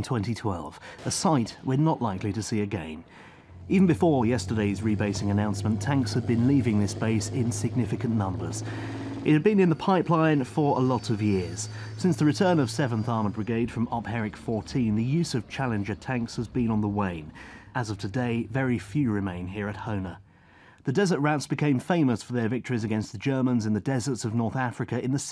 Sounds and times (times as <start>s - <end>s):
Speech: 0.0s - 3.1s, 3.7s - 20.2s, 20.8s - 25.3s.